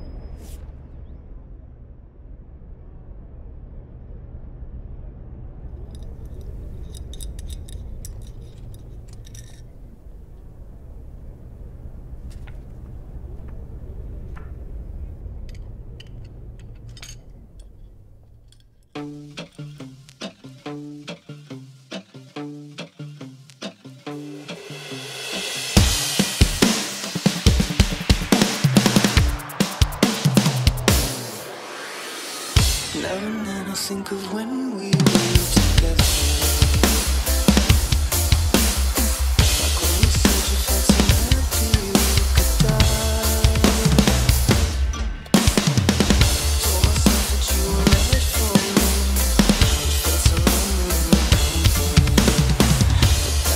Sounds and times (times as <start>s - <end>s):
Music: 18.9s - 53.5s.